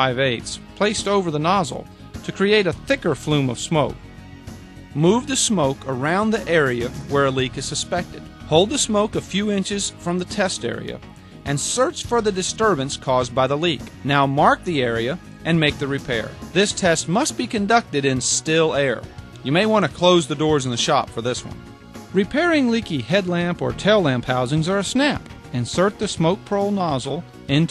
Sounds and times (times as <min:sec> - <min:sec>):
Speech: 0:00.0 - 0:04.0, 0:05.0 - 0:21.6, 0:22.2 - 0:27.7
Music: 0:00.0 - 0:27.7.